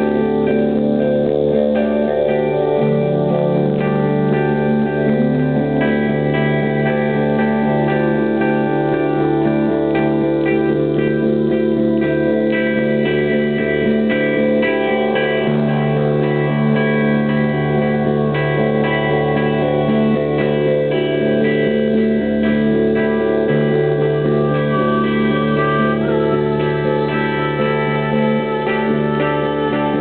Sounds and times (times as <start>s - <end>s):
Music: 0.0s - 30.0s.